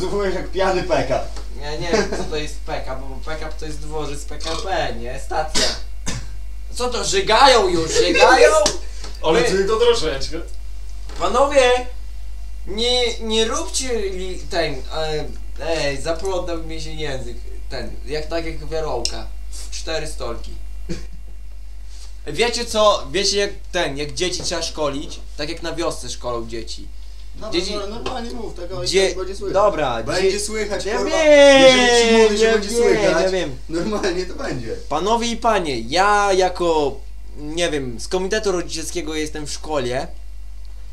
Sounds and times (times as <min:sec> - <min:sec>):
Speech: 0:00.0 - 0:05.8, 0:06.7 - 0:10.5, 0:12.7 - 0:20.6, 0:22.2 - 0:40.2.